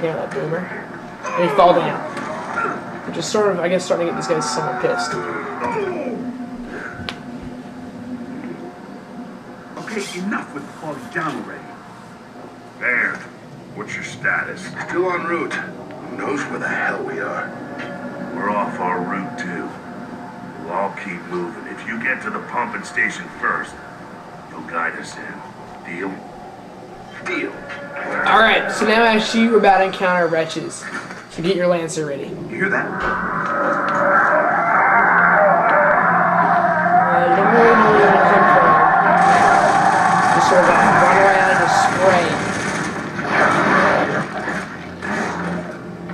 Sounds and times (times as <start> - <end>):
Speech: 9.8 - 11.6, 12.8 - 17.5, 20.6 - 23.8, 37.1 - 39.2.